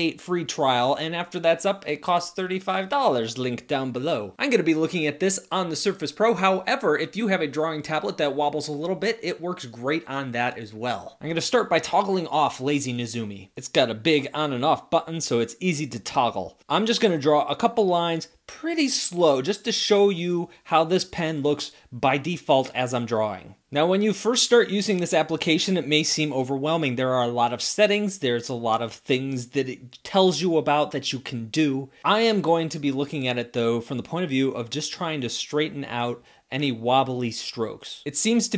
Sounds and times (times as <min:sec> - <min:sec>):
Speech: 0:00.0 - 0:38.5.